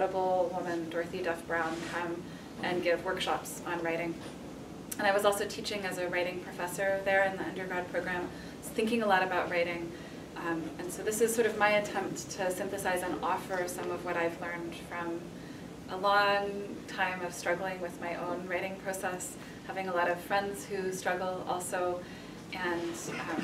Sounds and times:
Speech: 0.0 - 4.3, 5.0 - 15.3, 15.9 - 22.0, 22.6 - 23.4.

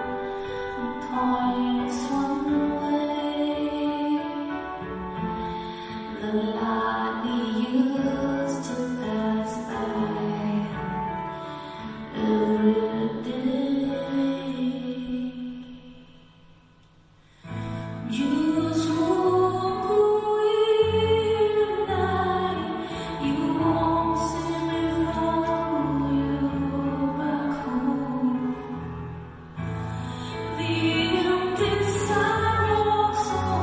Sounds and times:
Music: 0.0 - 33.6.

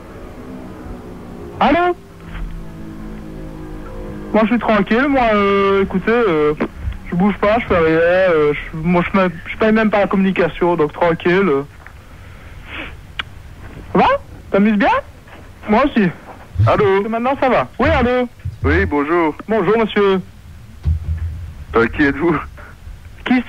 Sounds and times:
Speech: 1.6 - 2.0, 4.3 - 11.7, 13.9 - 20.3, 21.7 - 23.4.

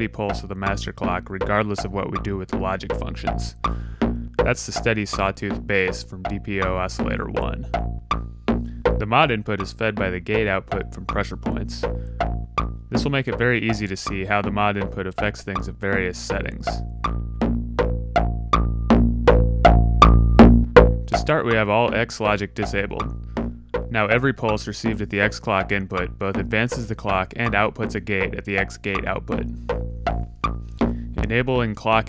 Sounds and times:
Speech: 0.0 - 3.6, 4.4 - 7.7, 9.0 - 11.9, 12.9 - 16.8, 21.1 - 23.1, 23.9 - 29.4, 31.2 - 32.0
Music: 0.0 - 32.0.

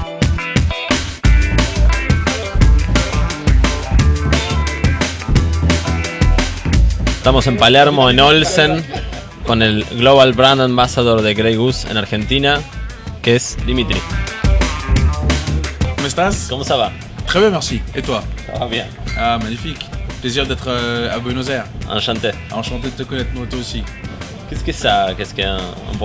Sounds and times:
Music: 0.0 - 26.0
Speech: 7.2 - 14.0, 16.0 - 23.9, 24.5 - 26.0.

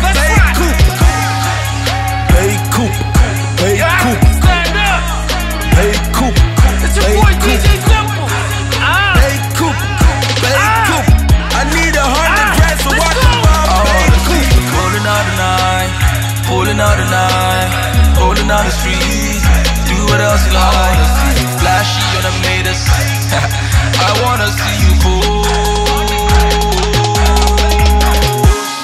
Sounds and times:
Exciting music: 0.0 - 28.8.

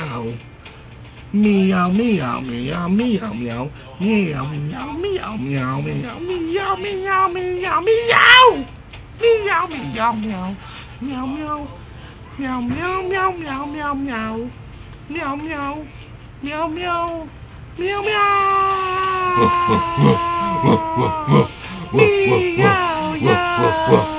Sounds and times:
Speech: 0.0 - 0.4, 1.3 - 14.5, 15.1 - 24.1.

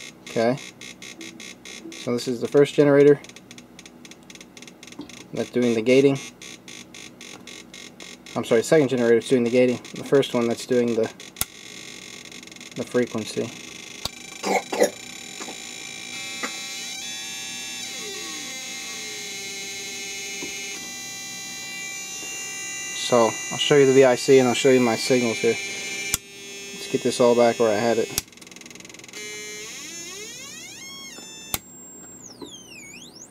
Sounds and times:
Speech: 0.3 - 0.6, 2.0 - 3.2, 5.4 - 6.2, 8.4 - 11.1, 12.8 - 13.6, 23.0 - 25.6, 26.8 - 28.2
Pulse: 11.2 - 33.3.

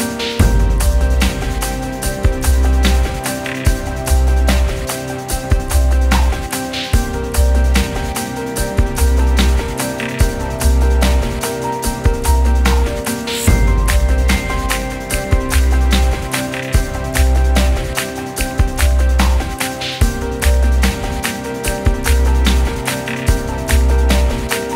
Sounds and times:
Music: 0.0 - 24.7.

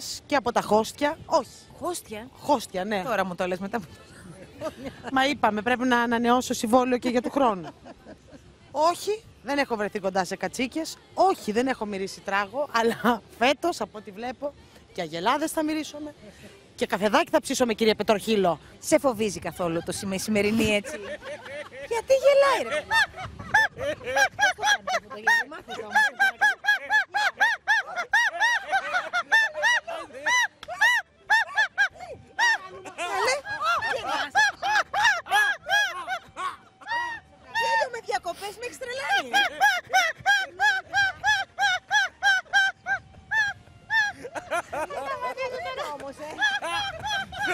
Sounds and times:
Music: 41.1 - 47.5.

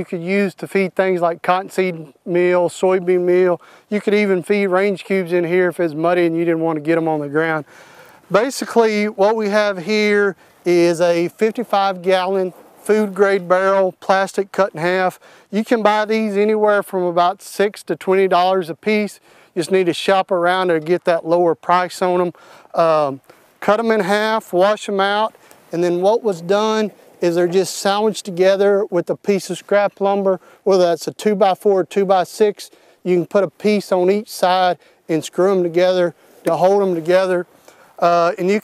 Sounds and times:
Speech: 0.0 - 7.7, 8.3 - 38.6.

